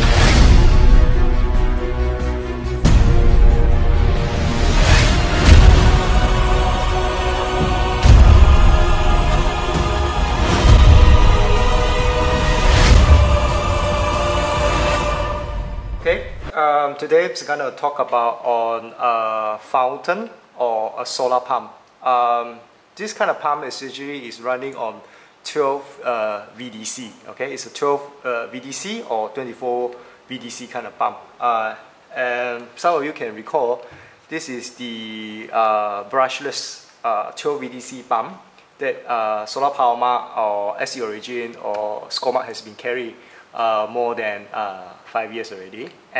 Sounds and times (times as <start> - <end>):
Speech: 16.1 - 46.1.